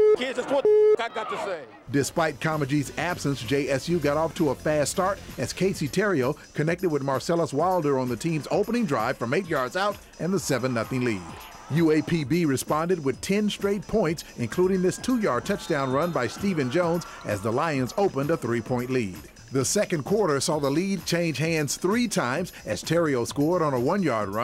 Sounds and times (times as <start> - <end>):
Speech: 0.2 - 24.4
Music: 1.9 - 24.4.